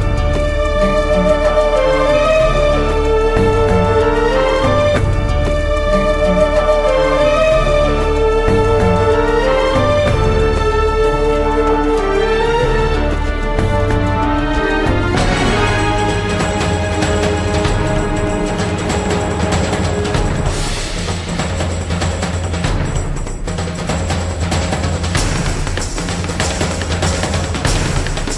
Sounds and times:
Dance music: 0:14.6 - 0:23.5.

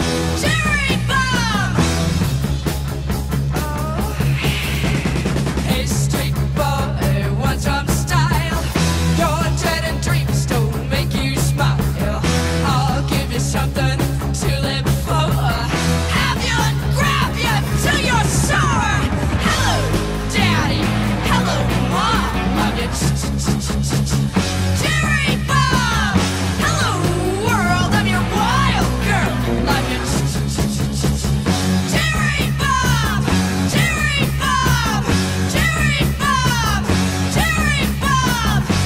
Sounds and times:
Grunge: 0:00.0 - 0:38.8.

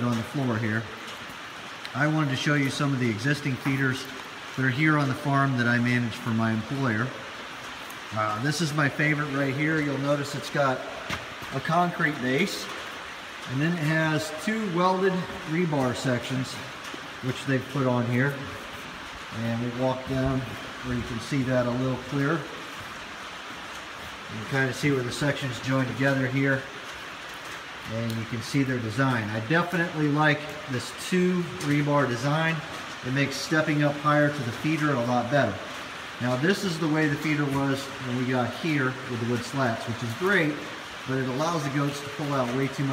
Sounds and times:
Speech: 0:00.0 - 0:01.0, 0:01.9 - 0:07.2, 0:08.1 - 0:12.8, 0:13.4 - 0:18.6, 0:19.3 - 0:22.5, 0:24.3 - 0:26.7, 0:27.9 - 0:42.9.

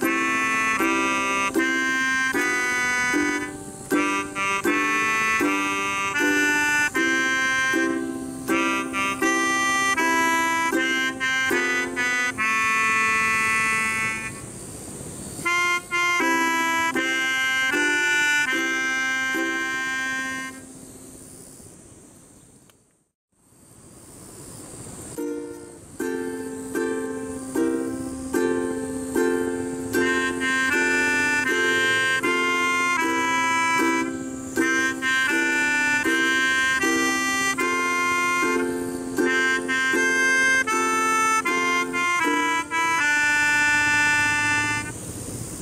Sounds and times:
Music: 0:00.0 - 0:14.4, 0:15.4 - 0:20.7, 0:25.2 - 0:44.9.

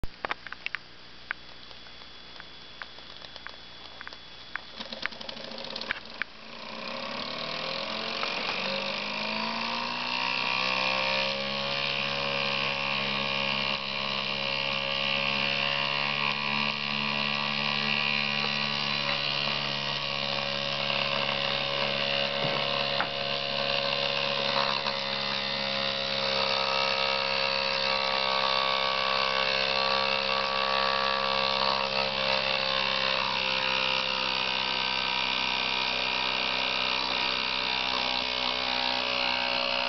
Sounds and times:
Engine: 0:02.1 - 0:39.8.

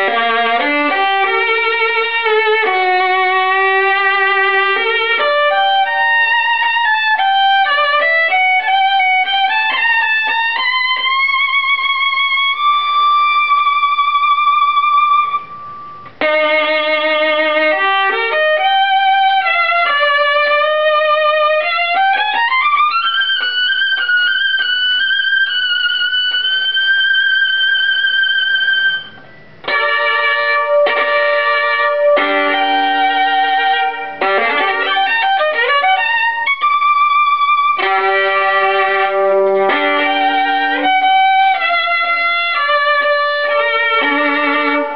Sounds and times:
Violin, fiddle: 0:00.0 - 0:15.5, 0:16.1 - 0:44.9.

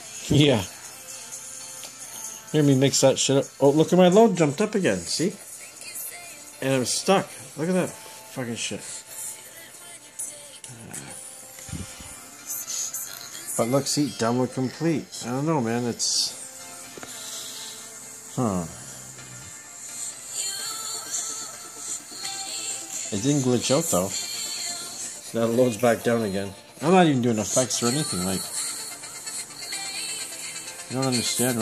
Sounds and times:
Music: 0:00.0 - 0:31.6
Speech: 0:25.4 - 0:28.5, 0:30.9 - 0:31.6.

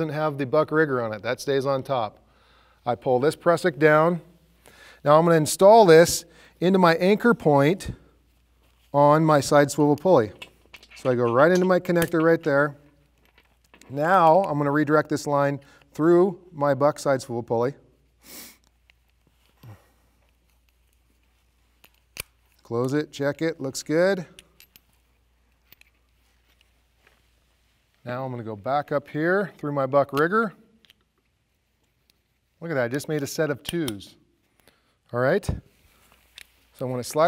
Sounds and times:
Speech: 0:00.0 - 0:02.2, 0:02.9 - 0:04.3, 0:05.0 - 0:08.0, 0:08.9 - 0:10.4, 0:11.0 - 0:12.8, 0:13.9 - 0:17.8, 0:22.7 - 0:24.3, 0:28.0 - 0:30.6, 0:32.6 - 0:34.2, 0:35.1 - 0:35.7, 0:36.8 - 0:37.2.

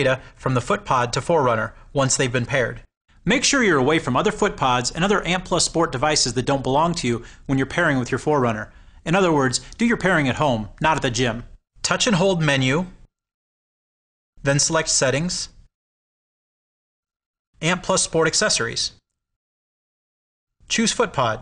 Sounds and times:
Speech: 0:00.0 - 0:13.1, 0:14.4 - 0:15.7, 0:17.6 - 0:19.0, 0:20.7 - 0:21.4.

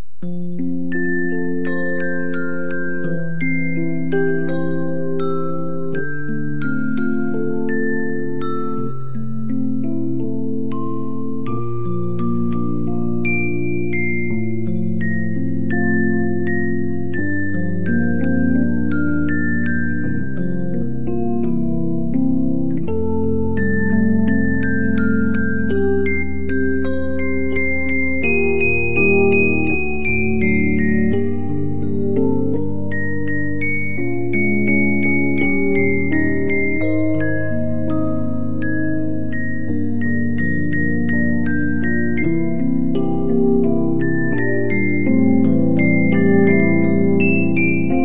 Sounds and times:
Music: 0:00.0 - 0:48.0.

